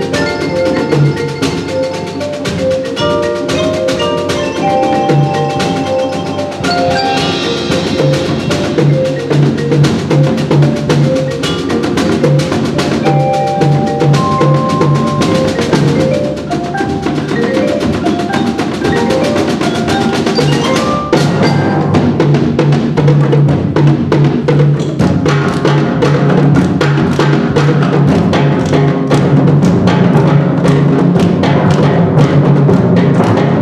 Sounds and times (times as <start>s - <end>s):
Drum: 0.0s - 33.6s.